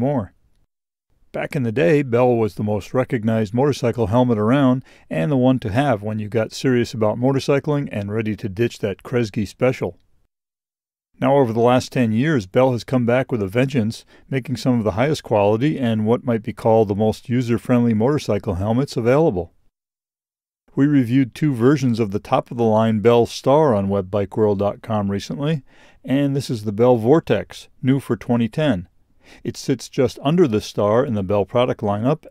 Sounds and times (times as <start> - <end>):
Speech: 0.0 - 0.4, 1.3 - 10.0, 11.2 - 19.5, 20.7 - 32.3.